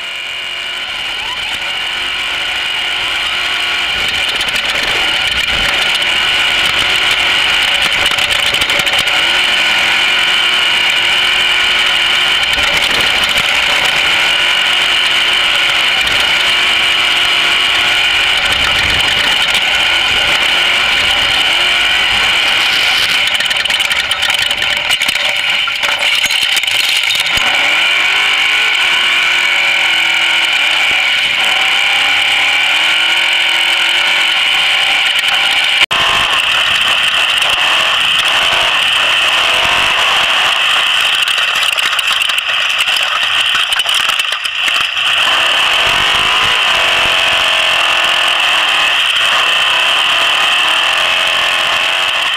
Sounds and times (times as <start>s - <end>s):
Outside, rural or natural: 0.0s - 52.3s
Vehicle: 0.0s - 52.3s.